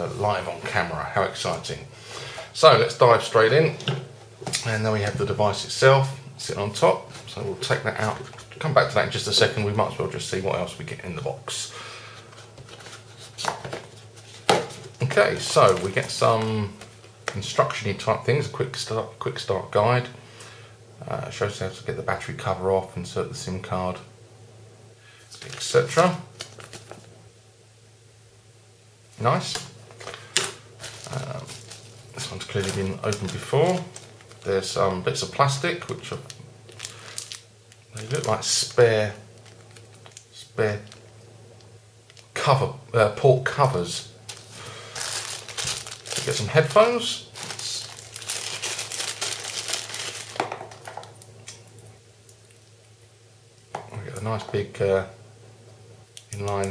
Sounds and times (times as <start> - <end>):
Speech: 0.0 - 1.9, 2.5 - 4.0, 4.6 - 11.7, 15.0 - 20.2, 21.0 - 24.1, 25.3 - 26.3, 29.2 - 29.7, 31.1 - 31.6, 32.2 - 36.4, 37.9 - 39.3, 40.3 - 40.9, 42.3 - 44.2, 46.2 - 47.9, 53.8 - 55.2, 56.3 - 56.7.